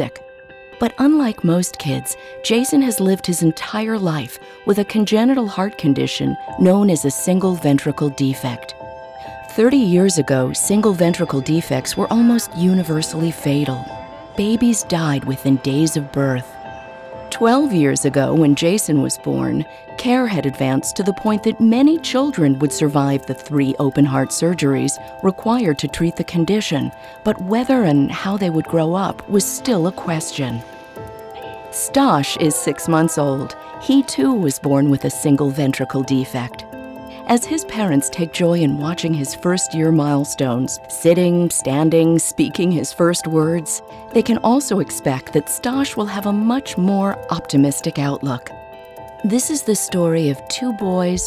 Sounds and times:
Music: 0.0s - 51.2s
Speech: 0.8s - 8.7s, 9.5s - 13.8s, 14.4s - 16.5s, 17.3s - 30.6s, 31.8s - 36.6s, 37.2s - 48.5s, 49.2s - 51.2s.

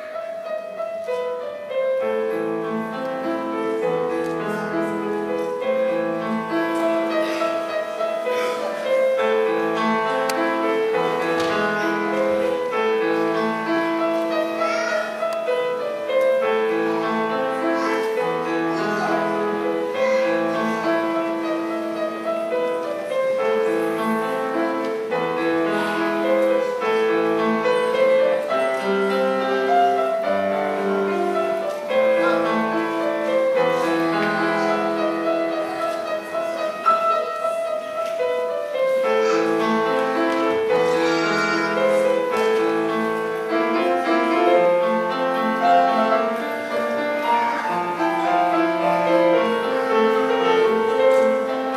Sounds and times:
Music: 0.0s - 51.7s.

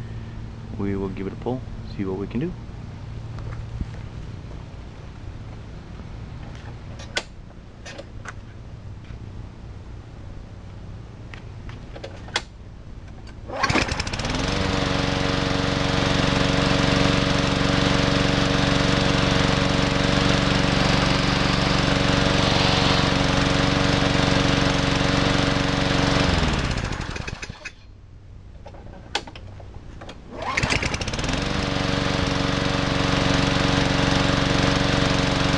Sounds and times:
Lawn mower: 13.3s - 27.9s, 28.6s - 35.5s.

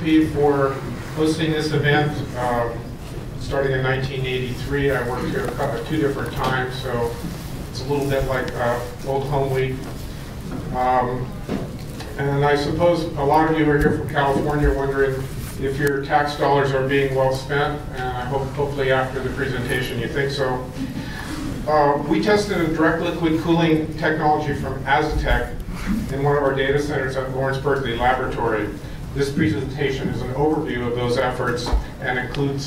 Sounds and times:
Speech: 0.0s - 10.0s, 10.7s - 11.4s, 12.2s - 20.8s, 21.6s - 32.6s.

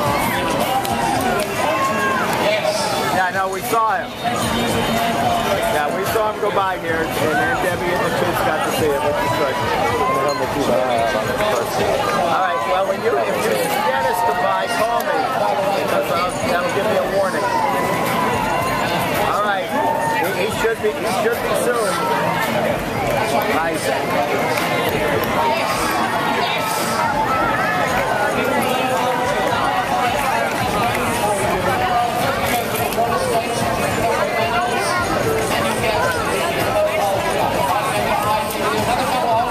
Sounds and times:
Crowd: 0.0s - 39.5s
Speech: 0.0s - 39.5s.

